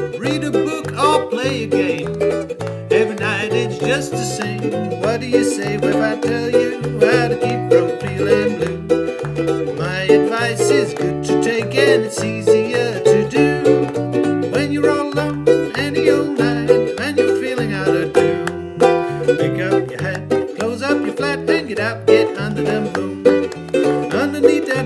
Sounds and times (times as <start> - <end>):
Ukulele: 0.0 - 24.8.